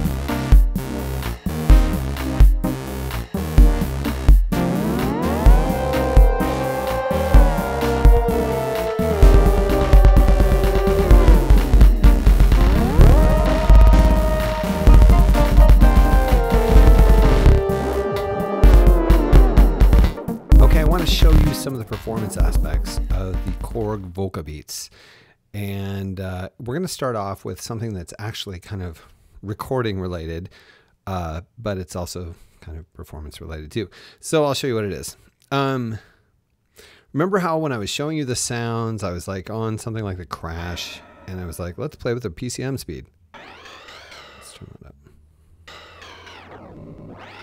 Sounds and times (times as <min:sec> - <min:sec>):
Synthesizer: 0:01.5 - 0:23.9, 0:43.4 - 0:44.8, 0:45.7 - 0:47.4.